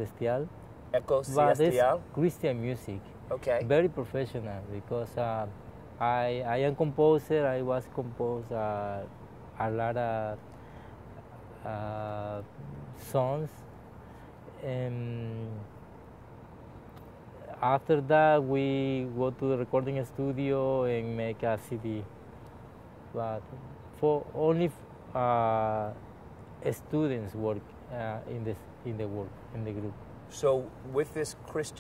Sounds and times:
Speech: 0.0s - 10.4s, 14.6s - 15.7s, 17.5s - 22.1s, 23.2s - 26.0s, 26.6s - 31.8s.

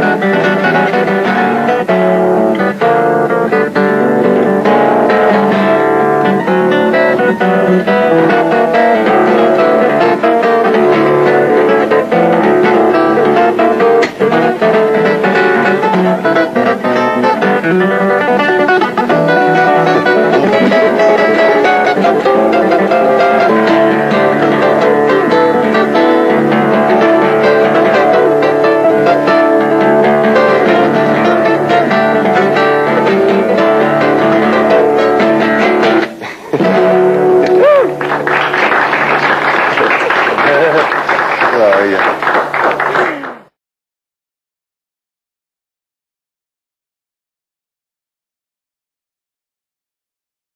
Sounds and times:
Guitar: 0.0s - 43.5s.

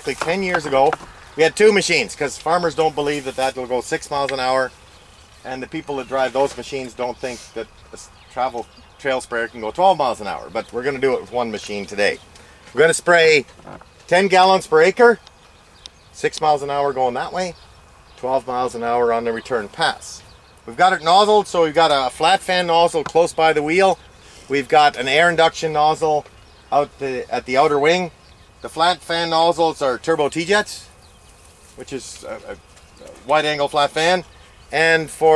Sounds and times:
Speech: 0.0s - 4.7s, 5.4s - 13.5s, 14.1s - 15.2s, 16.2s - 17.6s, 18.2s - 30.9s, 31.8s - 35.3s.

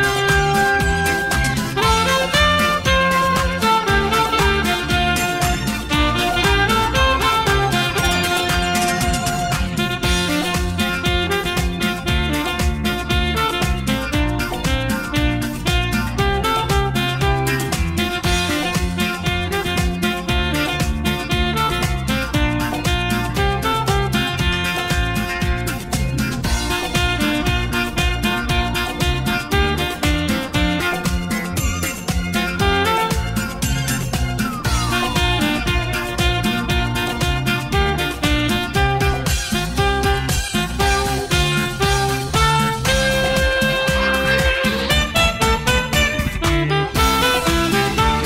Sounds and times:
Music for children: 0.0s - 48.2s.

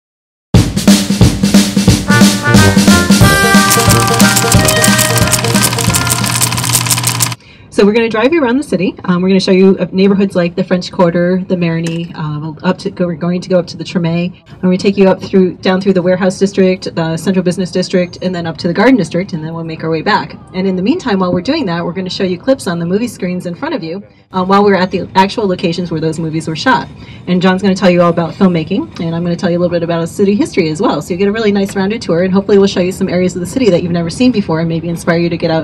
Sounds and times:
Drum kit: 0.6s - 7.4s
Snare drum: 0.6s - 7.4s.

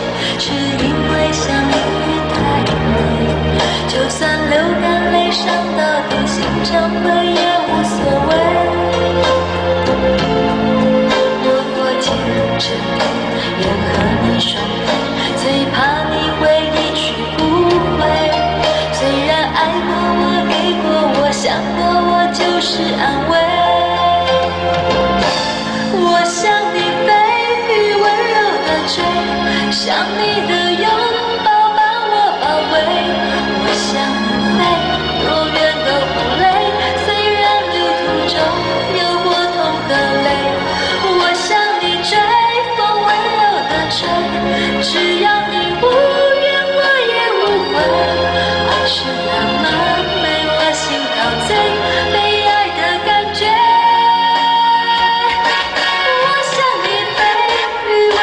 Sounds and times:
Music: 0.0s - 58.2s.

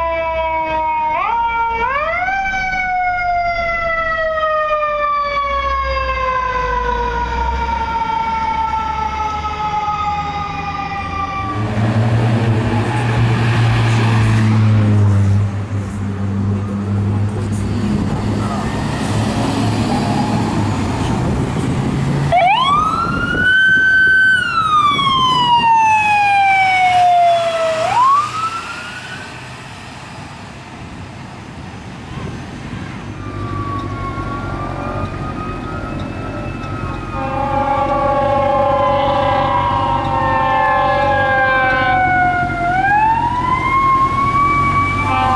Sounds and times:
Fire engine, fire truck (siren): 0.0s - 45.3s.

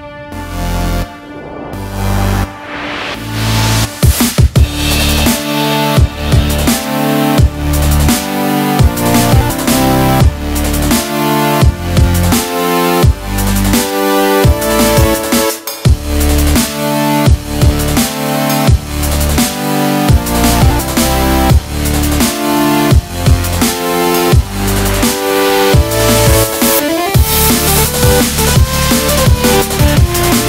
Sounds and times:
Music: 0.0s - 30.4s.

